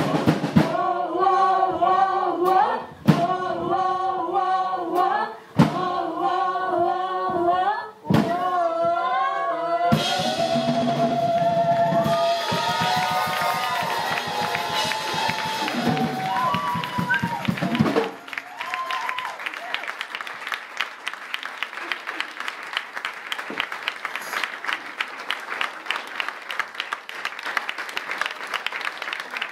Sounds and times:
Music: 0.0s - 4.0s, 9.8s - 18.2s
Singing: 0.0s - 17.3s.

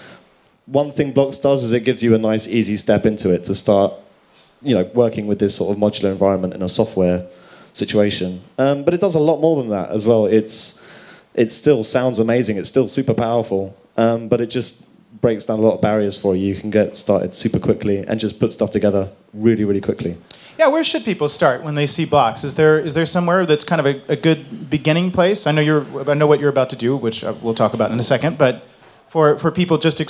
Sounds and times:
Speech: 0.7s - 10.8s, 11.4s - 30.0s.

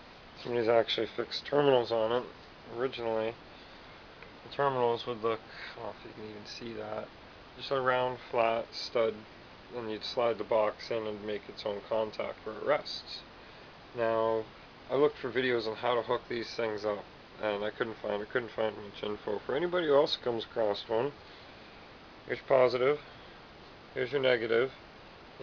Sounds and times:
Speech: 0.4s - 3.4s, 4.5s - 13.3s, 14.0s - 21.2s, 22.3s - 23.0s, 24.0s - 24.8s.

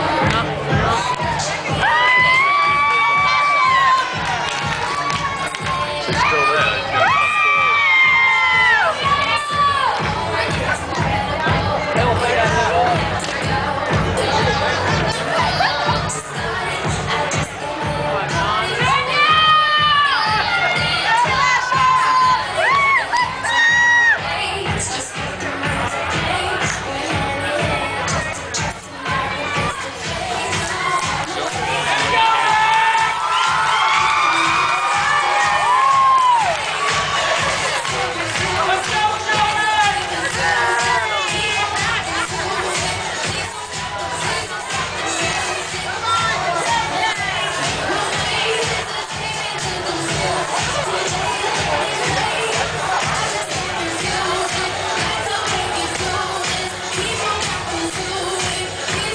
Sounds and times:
Crowd: 0.0s - 59.1s.

